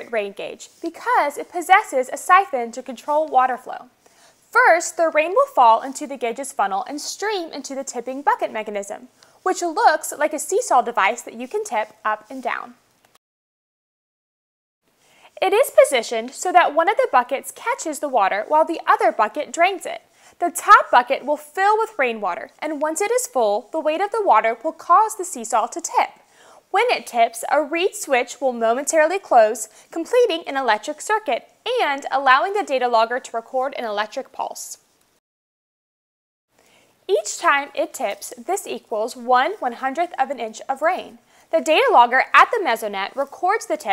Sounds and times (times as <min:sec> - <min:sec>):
Speech: 0:00.0 - 0:03.9, 0:04.5 - 0:12.8, 0:15.4 - 0:34.8, 0:37.1 - 0:43.9.